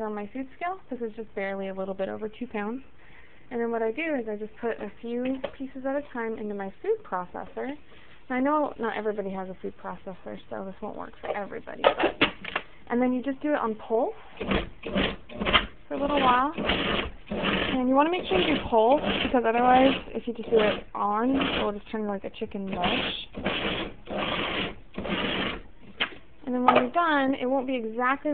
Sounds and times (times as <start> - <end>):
Speech: 0.0 - 2.8, 3.5 - 12.0, 12.9 - 14.2, 15.9 - 16.6, 17.7 - 23.3, 26.4 - 28.3.